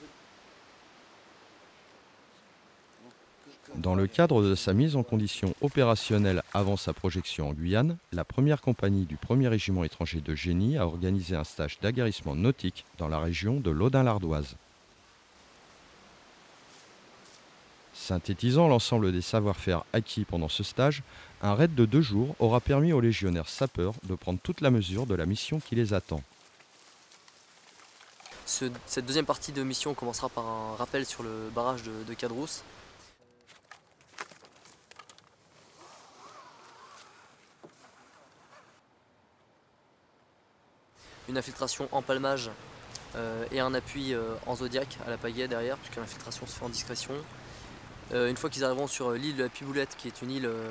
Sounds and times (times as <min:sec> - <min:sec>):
Speech: 0:03.0 - 0:14.6, 0:17.9 - 0:26.3, 0:28.5 - 0:32.6, 0:41.3 - 0:47.3, 0:48.1 - 0:50.7.